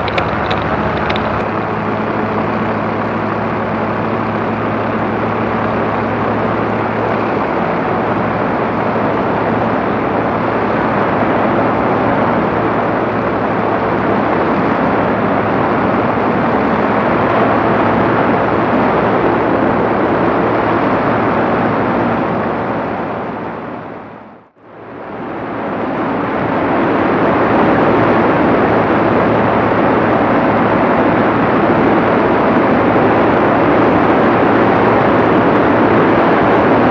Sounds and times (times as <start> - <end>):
Vehicle: 0.0 - 36.9.